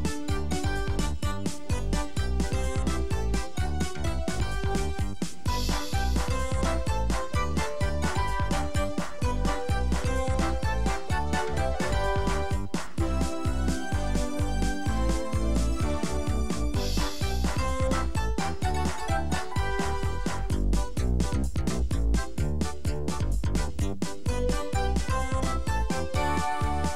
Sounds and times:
Music: 0.0 - 26.9.

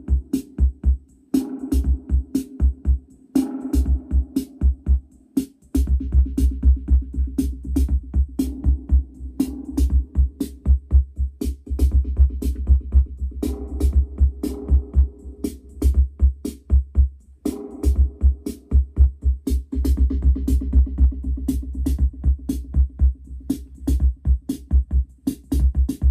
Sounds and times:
Drum machine: 0.0 - 26.1.

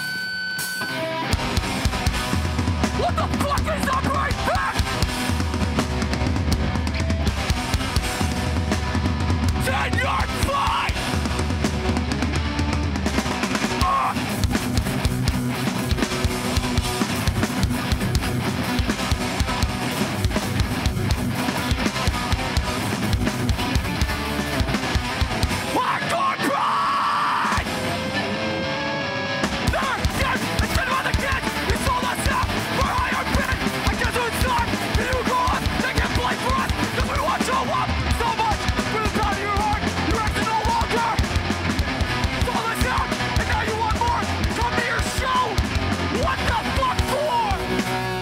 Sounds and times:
Music: 0.0 - 48.2.

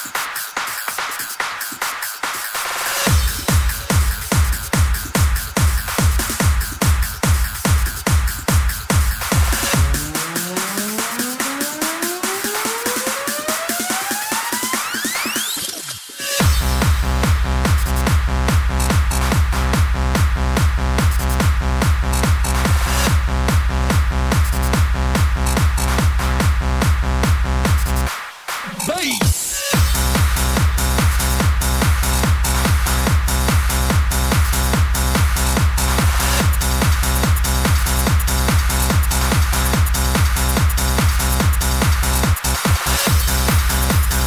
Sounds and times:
Music: 0.0 - 44.2.

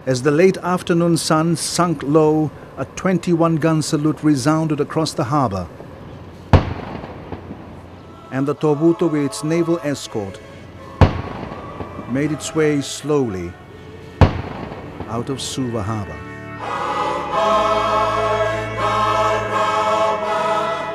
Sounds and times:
Speech: 0.0 - 5.7, 12.1 - 13.6, 15.1 - 16.2
Outside, urban or manmade: 0.0 - 20.9
Music: 1.8 - 20.9
Firecracker: 6.5 - 7.7, 11.0 - 12.0, 14.2 - 15.2.

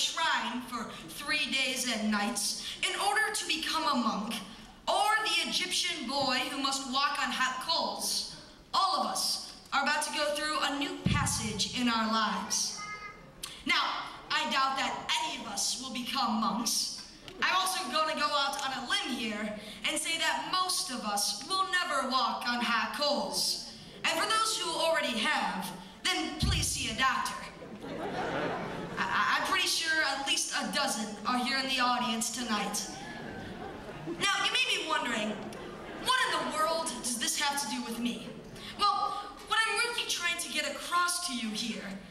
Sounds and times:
Narration, monologue: 0.0 - 27.7, 28.7 - 42.1
Child speech, kid speaking: 5.0 - 19.4, 38.8 - 41.9.

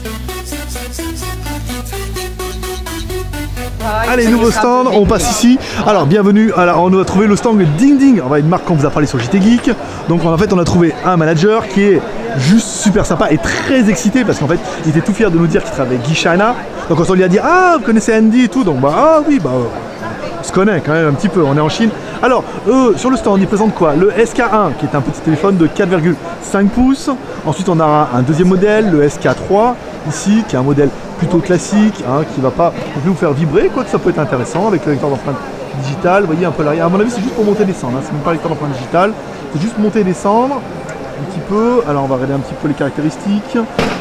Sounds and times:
Speech: 3.8 - 43.8.

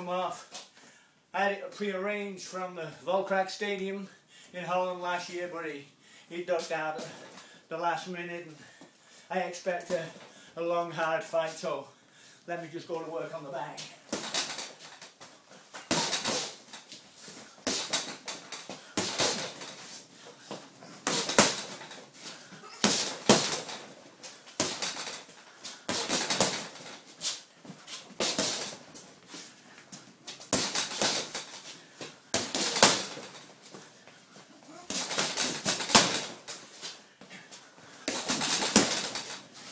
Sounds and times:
Inside, small room: 0.0 - 39.7.

